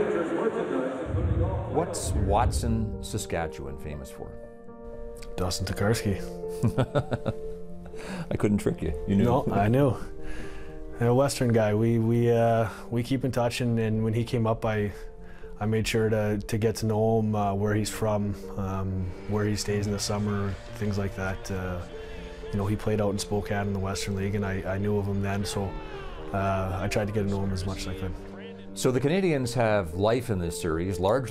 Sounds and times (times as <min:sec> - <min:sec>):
Speech: 0:00.0 - 0:04.4, 0:05.4 - 0:06.3, 0:08.3 - 0:10.1, 0:11.0 - 0:15.0, 0:15.6 - 0:21.9, 0:22.5 - 0:28.2, 0:28.8 - 0:31.3
Music: 0:00.0 - 0:31.3.